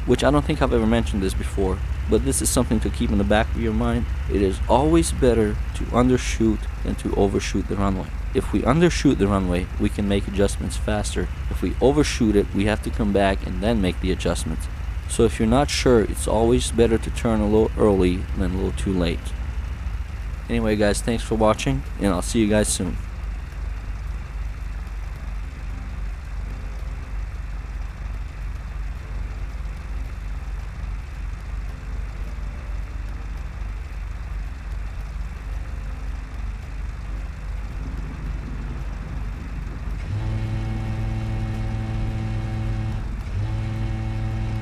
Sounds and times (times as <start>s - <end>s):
Outside, urban or manmade: 0.0s - 44.6s
Vehicle: 0.0s - 44.6s.